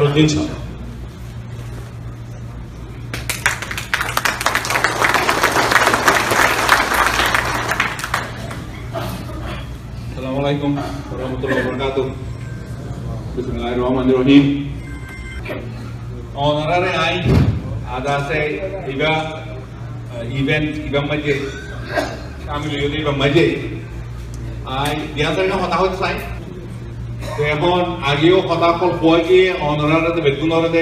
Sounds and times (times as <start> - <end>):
Male speech, man speaking: 0.0 - 0.6, 10.2 - 12.2, 13.4 - 14.7, 16.4 - 21.5, 22.5 - 23.8, 24.7 - 26.4, 27.4 - 30.8.